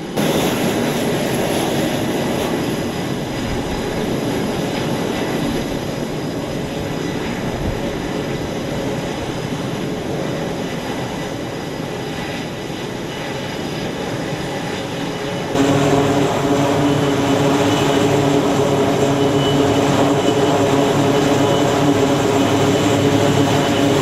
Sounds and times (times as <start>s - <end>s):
Fixed-wing aircraft, airplane: 0.0s - 24.0s
Outside, urban or manmade: 0.0s - 24.0s
Propeller, airscrew: 0.0s - 24.0s.